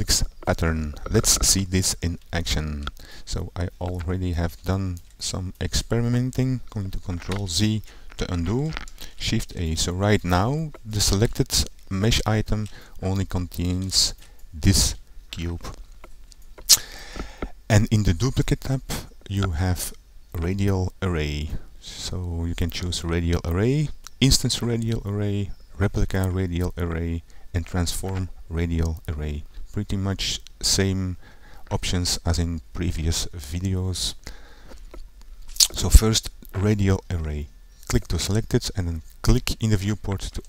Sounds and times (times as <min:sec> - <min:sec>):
Speech: 0:00.0 - 0:15.8, 0:17.7 - 0:34.2, 0:35.6 - 0:40.4.